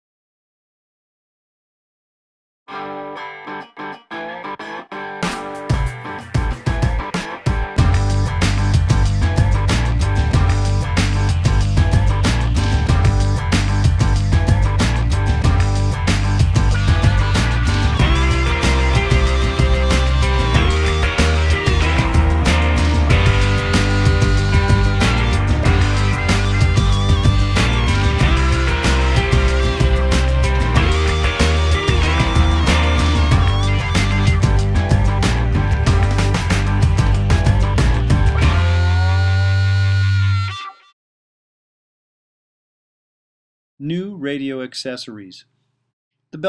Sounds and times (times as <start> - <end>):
Music: 2.7 - 41.0.